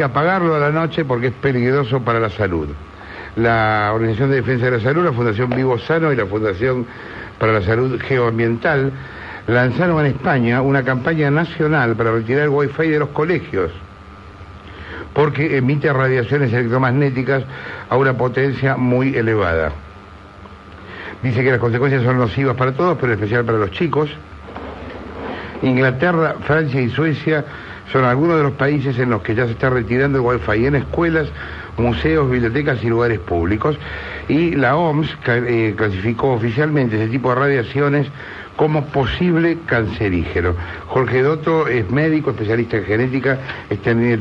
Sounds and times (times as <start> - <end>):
Speech: 0.0 - 2.8, 3.4 - 13.9, 15.1 - 19.8, 21.2 - 24.3, 25.6 - 44.2.